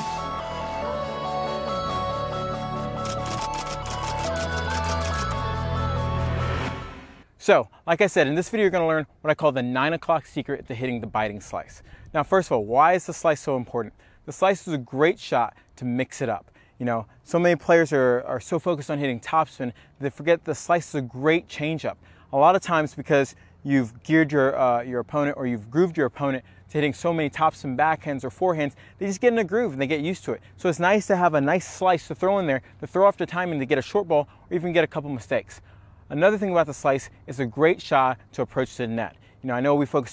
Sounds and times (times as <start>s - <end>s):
Speech: 7.4s - 40.1s.